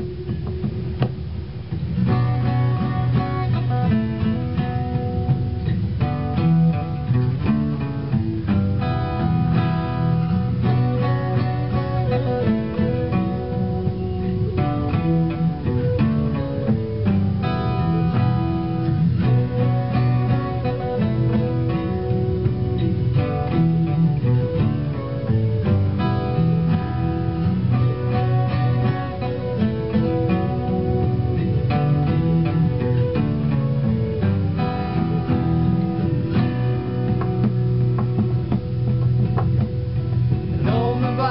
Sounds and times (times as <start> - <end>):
Acoustic guitar: 0.0 - 41.3
Strum: 0.0 - 41.3.